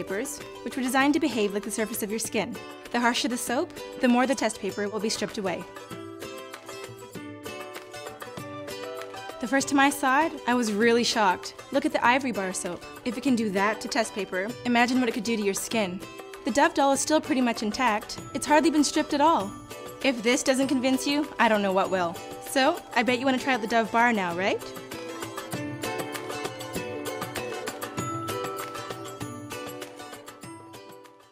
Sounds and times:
Speech: 0.0 - 5.7, 9.4 - 24.7
Music: 0.0 - 31.3.

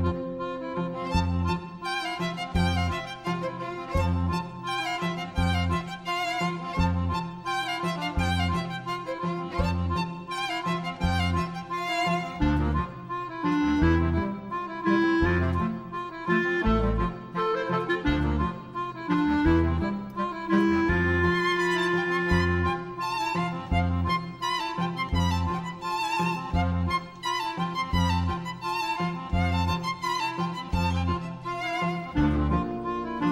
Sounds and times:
Music: 0.0 - 33.3.

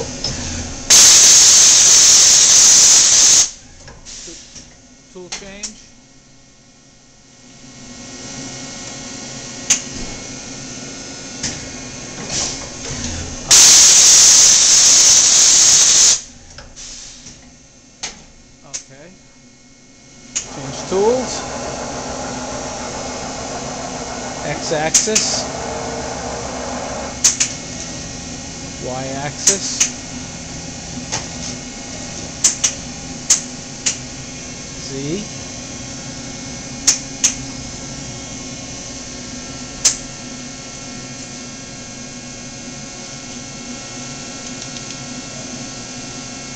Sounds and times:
Speech: 5.2 - 5.9, 18.6 - 19.2, 20.6 - 21.4, 24.4 - 25.5, 28.8 - 29.9, 34.8 - 35.3.

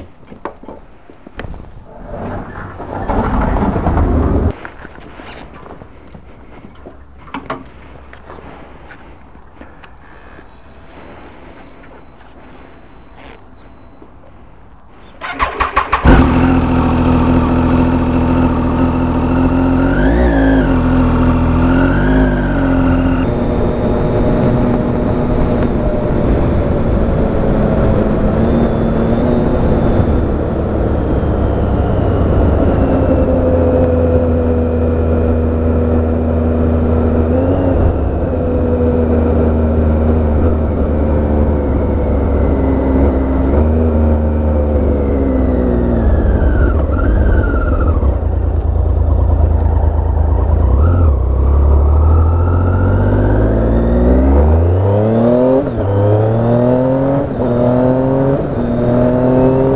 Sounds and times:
Motorcycle: 1.4 - 59.7.

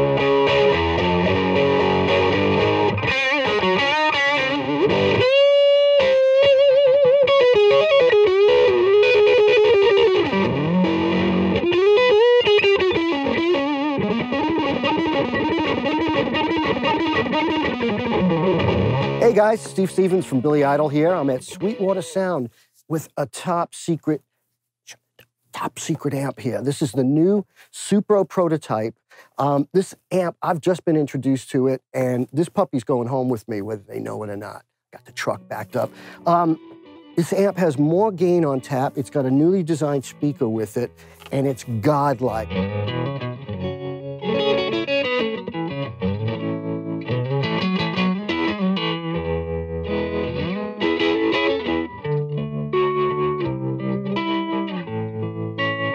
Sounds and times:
Bass guitar: 0.0 - 22.4, 33.0 - 55.9
Strum: 7.3 - 22.4, 35.0 - 55.9.

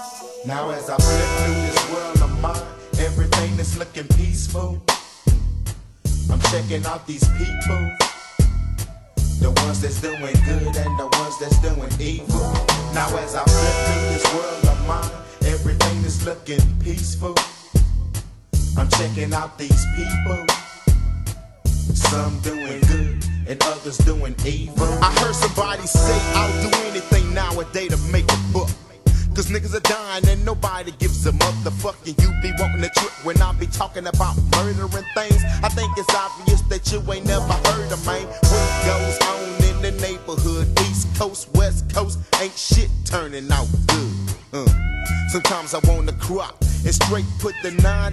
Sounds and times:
Hip hop music: 0.0 - 48.1.

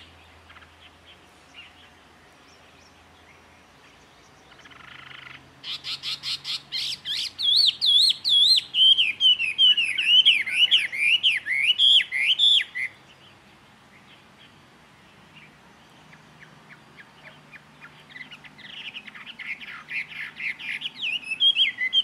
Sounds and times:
Chirp, tweet: 0.0 - 22.0.

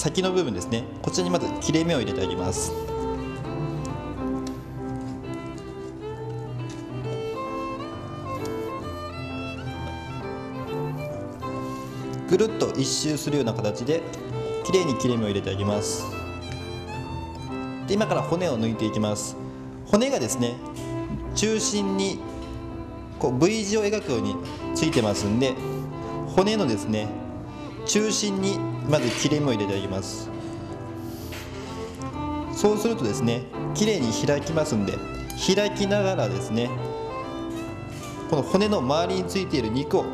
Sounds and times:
Speech: 0.0 - 2.8, 12.3 - 14.0, 14.7 - 16.0, 17.9 - 20.6, 23.2 - 25.6, 26.4 - 27.1, 27.9 - 30.3, 32.6 - 36.8, 38.3 - 40.1
Music: 0.0 - 40.1.

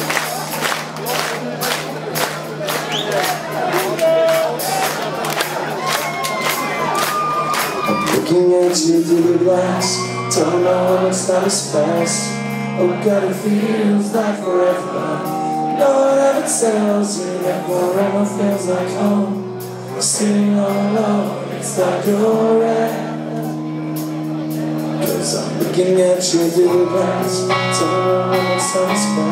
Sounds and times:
Music: 0.0 - 29.3
Speech: 23.4 - 26.8.

